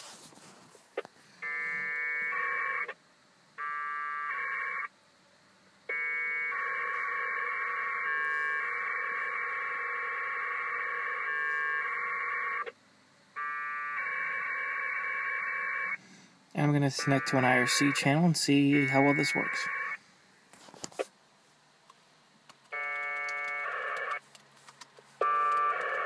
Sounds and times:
Buzzer: 0:01.4 - 0:03.0, 0:03.6 - 0:04.9, 0:05.9 - 0:12.7, 0:13.4 - 0:16.0, 0:16.6 - 0:20.0, 0:22.8 - 0:24.2, 0:25.2 - 0:26.0.

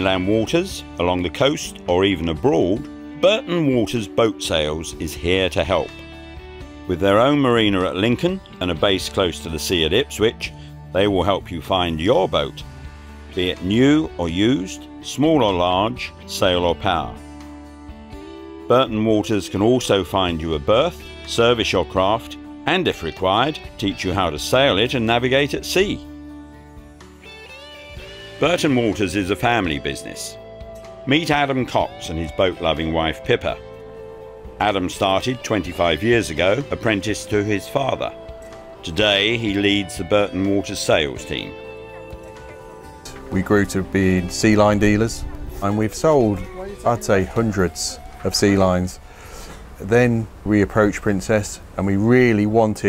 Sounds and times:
Speech: 0:00.0 - 0:05.9, 0:06.9 - 0:12.6, 0:13.4 - 0:17.2, 0:18.7 - 0:26.1, 0:28.4 - 0:30.4, 0:31.1 - 0:33.6, 0:34.6 - 0:38.2, 0:38.8 - 0:41.6, 0:43.3 - 0:49.0, 0:49.8 - 0:52.8
Music: 0:00.0 - 0:52.8.

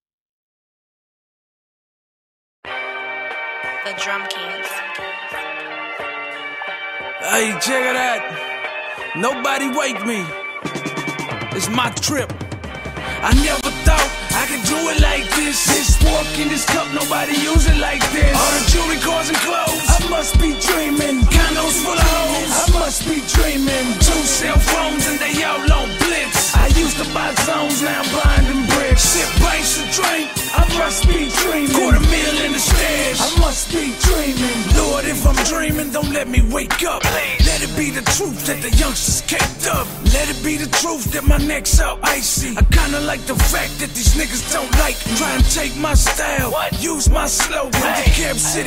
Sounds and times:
Rhythm and blues: 0:02.7 - 0:48.6.

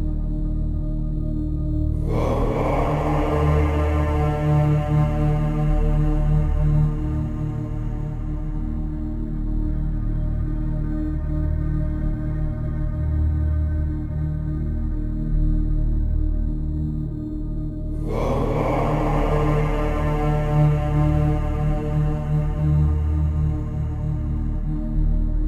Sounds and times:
Mantra: 0:01.9 - 0:08.7, 0:17.9 - 0:24.6.

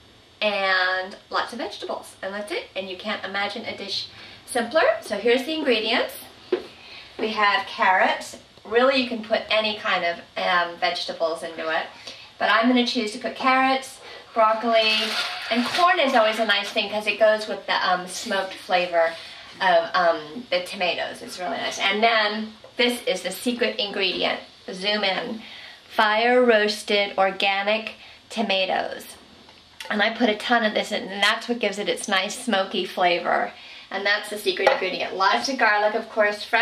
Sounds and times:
Speech: 0:00.4 - 0:06.3, 0:07.2 - 0:29.2, 0:29.8 - 0:36.6.

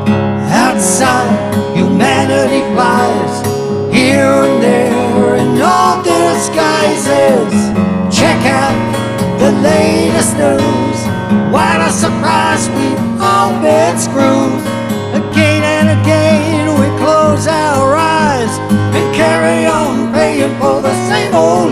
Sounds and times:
Acoustic guitar: 0:00.0 - 0:21.7.

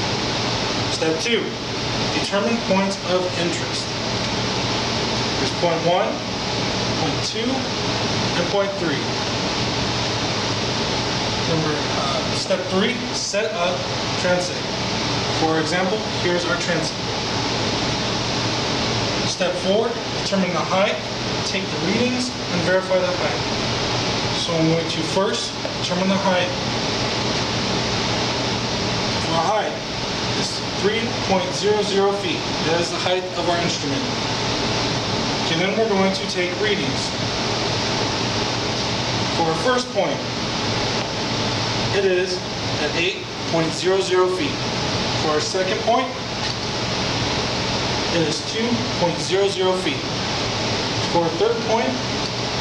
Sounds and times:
Speech: 0:00.9 - 0:01.6, 0:02.2 - 0:03.9, 0:05.4 - 0:06.3, 0:07.0 - 0:09.2, 0:11.5 - 0:14.7, 0:15.4 - 0:17.0, 0:19.3 - 0:23.5, 0:24.4 - 0:26.6, 0:29.2 - 0:34.2, 0:35.4 - 0:37.2, 0:39.4 - 0:40.3, 0:41.9 - 0:44.6, 0:45.2 - 0:46.2, 0:48.1 - 0:50.1, 0:51.1 - 0:52.1.

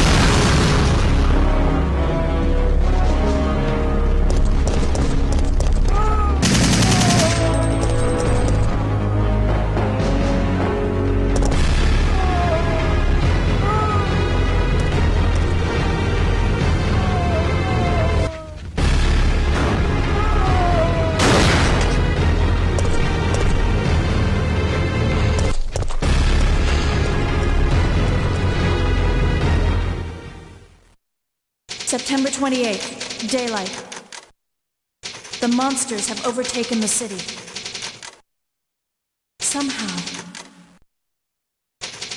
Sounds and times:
Music: 0:00.8 - 0:31.0.

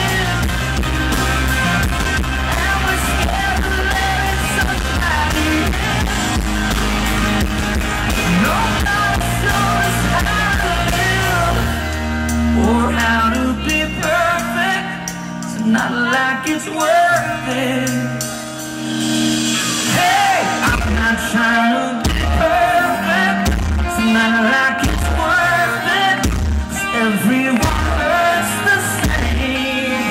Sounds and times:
Inside, large room or hall: 0:00.0 - 0:30.1
Music: 0:00.0 - 0:30.1
Singing: 0:02.2 - 0:07.2, 0:08.1 - 0:11.9, 0:19.9 - 0:30.1.

